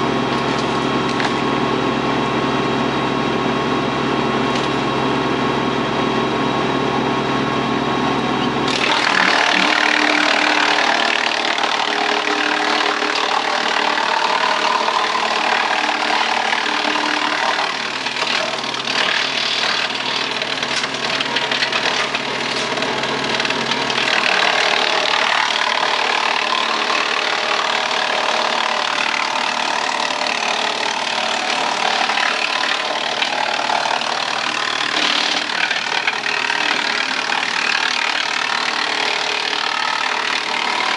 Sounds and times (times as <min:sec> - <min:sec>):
Wood: 0:00.0 - 0:01.5, 0:08.7 - 0:40.9
Sawing: 0:00.0 - 0:05.3, 0:08.1 - 0:40.9.